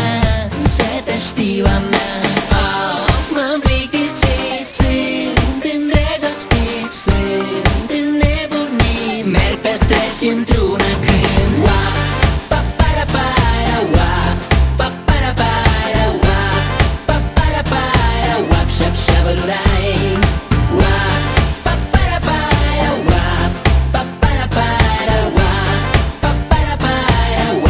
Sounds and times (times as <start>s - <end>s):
Pop music: 0.0s - 27.6s
Singing: 0.0s - 27.6s.